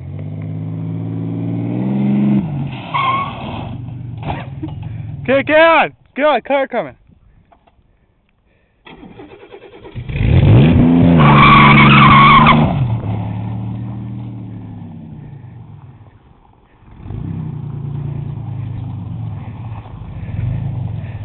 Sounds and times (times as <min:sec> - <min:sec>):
Car: 0:00.0 - 0:05.9, 0:07.0 - 0:21.2.